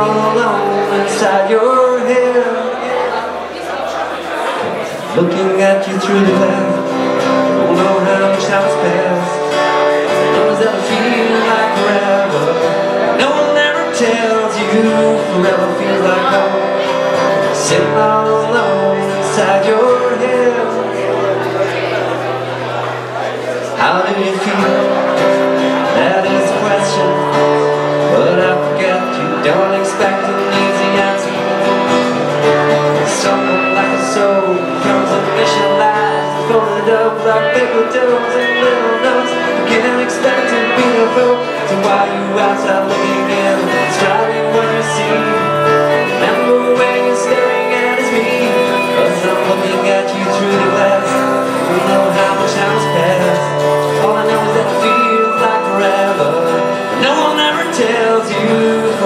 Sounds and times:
Music: 0:00.0 - 0:02.8, 0:05.1 - 0:59.0.

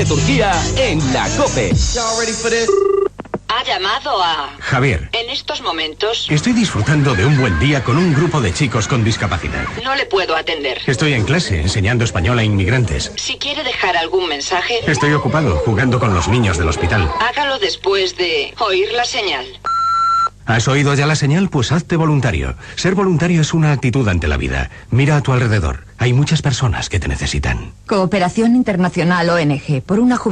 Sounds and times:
Radio: 0:07.8 - 0:19.7.

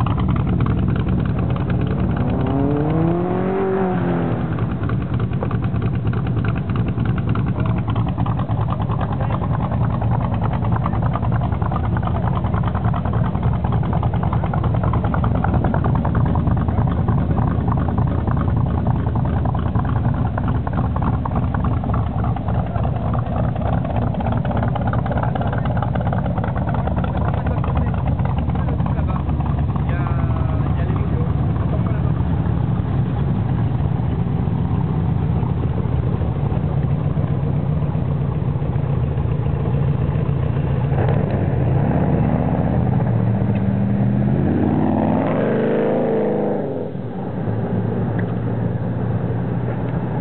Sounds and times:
Speech: 0:08.8 - 0:11.2, 0:25.0 - 0:32.6.

